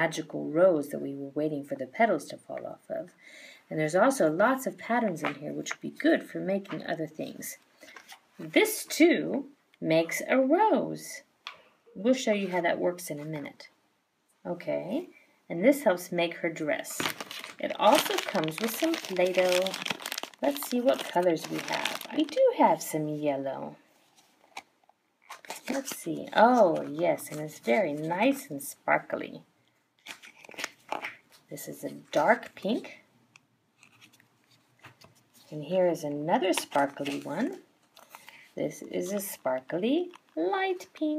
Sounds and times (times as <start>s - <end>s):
Speech: 0.0s - 7.6s, 8.4s - 11.3s, 12.0s - 13.8s, 14.4s - 23.8s, 25.5s - 29.5s, 31.5s - 33.1s, 35.5s - 37.7s, 38.6s - 41.1s.